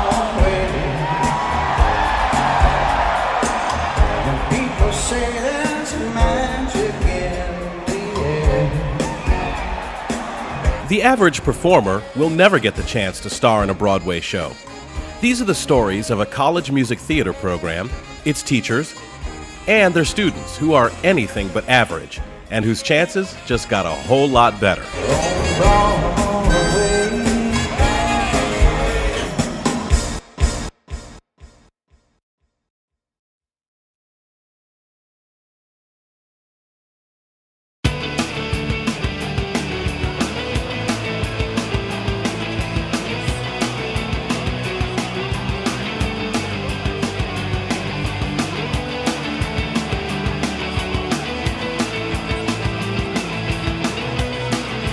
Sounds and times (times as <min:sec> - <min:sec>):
Music: 0:00.0 - 0:32.2, 0:37.8 - 0:54.9
Speech: 0:10.9 - 0:14.6, 0:15.2 - 0:19.0, 0:19.7 - 0:25.7.